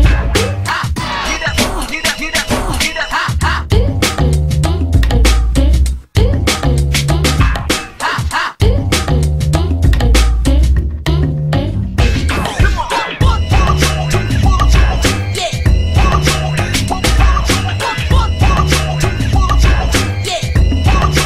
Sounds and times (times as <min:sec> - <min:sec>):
Music: 0:00.0 - 0:21.2.